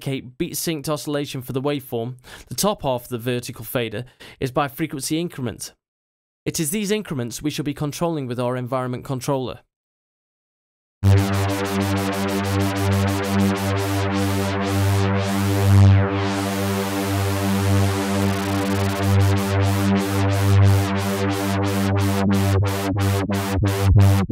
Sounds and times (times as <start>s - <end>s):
Synthesizer: 11.0s - 24.3s.